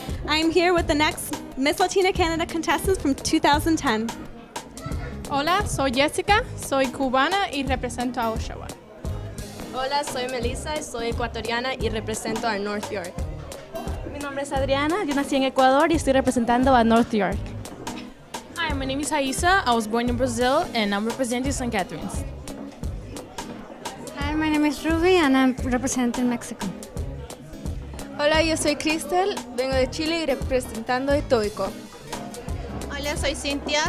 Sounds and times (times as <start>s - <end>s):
Music: 0.0s - 33.8s.